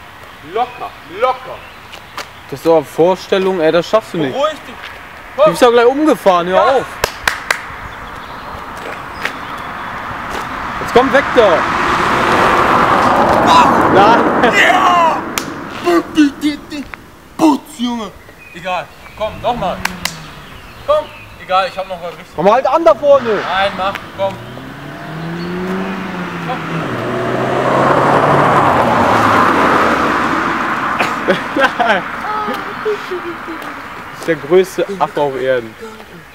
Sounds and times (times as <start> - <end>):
Car passing by: 6.6 - 16.9, 19.2 - 35.6
Speech: 13.5 - 19.8, 20.9 - 24.4.